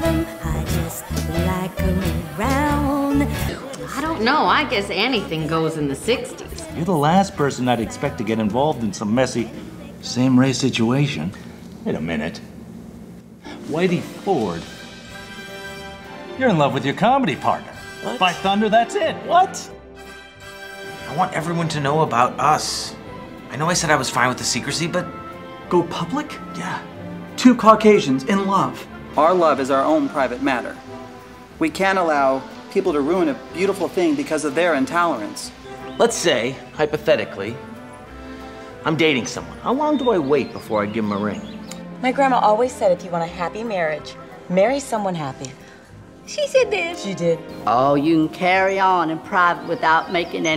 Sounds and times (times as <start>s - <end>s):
Music: 0.0s - 50.5s.